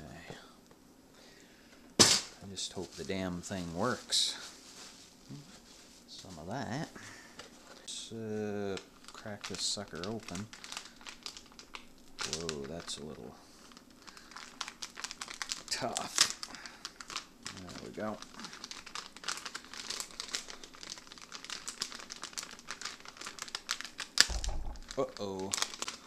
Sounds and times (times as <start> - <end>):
Speech: 0.0 - 0.5, 2.4 - 4.5, 6.1 - 7.0, 7.9 - 10.5, 12.2 - 13.4, 15.7 - 16.2, 17.5 - 18.2, 25.0 - 25.6
Inside, small room: 0.0 - 26.0
Crumpling, crinkling: 2.6 - 26.0.